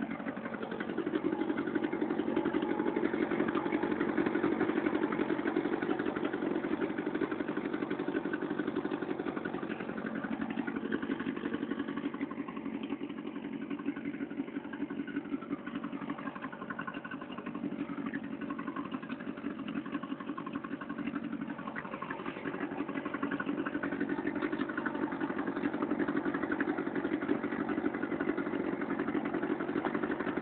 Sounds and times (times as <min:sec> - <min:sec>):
Idling: 0:00.0 - 0:30.4
Vehicle: 0:00.0 - 0:30.4.